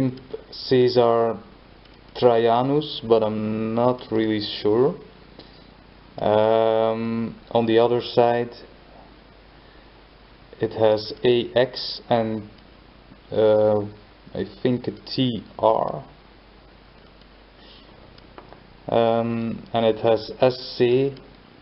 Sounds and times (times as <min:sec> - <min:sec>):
Speech: 0:00.0 - 0:01.5, 0:02.2 - 0:05.1, 0:06.2 - 0:08.7, 0:10.6 - 0:12.6, 0:13.3 - 0:16.2, 0:18.9 - 0:21.3.